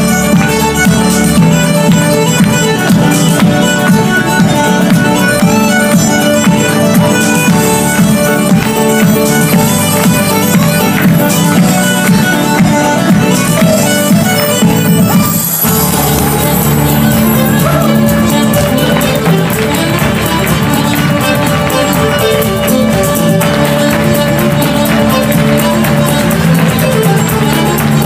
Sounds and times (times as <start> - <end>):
Dance music: 0.0 - 28.0
Independent music: 0.0 - 28.0.